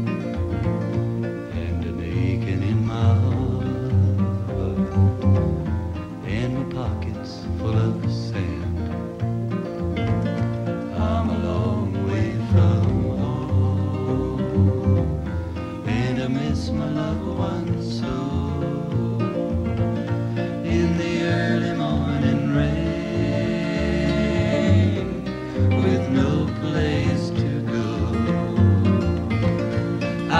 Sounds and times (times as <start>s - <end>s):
Music: 0.0s - 30.3s.